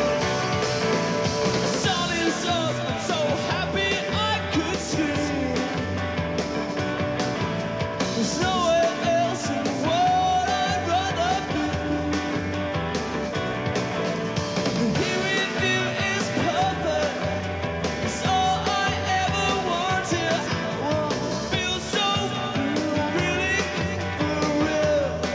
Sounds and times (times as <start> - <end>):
Music: 0.0 - 25.3.